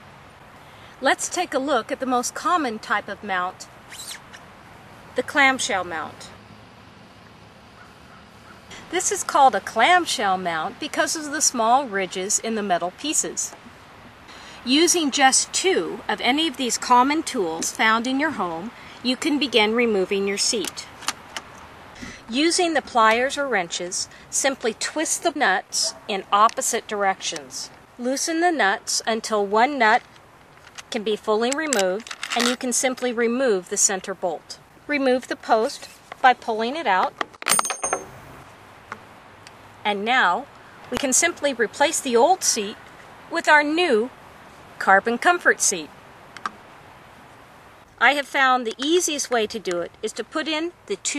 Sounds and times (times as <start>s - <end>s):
Speech: 1.0s - 3.7s, 5.2s - 6.4s, 8.8s - 13.6s, 14.6s - 20.9s, 22.0s - 30.0s, 30.9s - 37.1s, 39.8s - 44.1s, 44.8s - 45.9s, 48.0s - 51.1s.